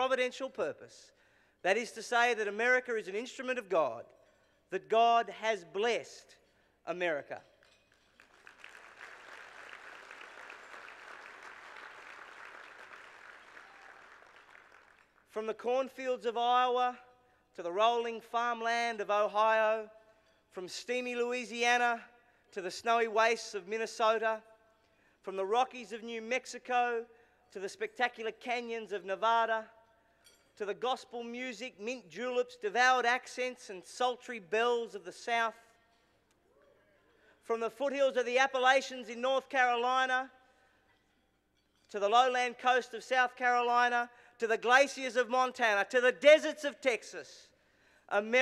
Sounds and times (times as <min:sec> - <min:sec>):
Male speech, man speaking: 0:00.0 - 0:01.1, 0:01.7 - 0:04.1, 0:04.7 - 0:07.5, 0:15.3 - 0:19.9, 0:20.6 - 0:24.5, 0:25.3 - 0:29.8, 0:30.6 - 0:35.7, 0:37.4 - 0:40.4, 0:41.9 - 0:47.5, 0:48.1 - 0:48.4
Narration, monologue: 0:00.0 - 0:09.5, 0:14.4 - 0:48.4.